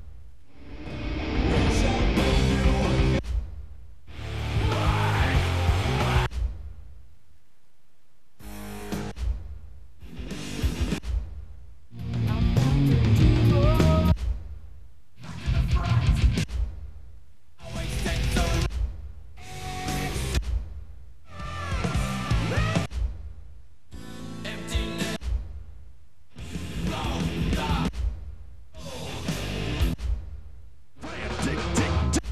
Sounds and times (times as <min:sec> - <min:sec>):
Bass guitar: 0:00.5 - 0:03.2, 0:04.1 - 0:06.3, 0:10.0 - 0:11.2, 0:12.0 - 0:14.2, 0:15.2 - 0:16.6, 0:17.6 - 0:18.8, 0:19.4 - 0:20.4, 0:21.3 - 0:23.0, 0:26.4 - 0:28.0, 0:28.8 - 0:30.1, 0:31.0 - 0:32.3.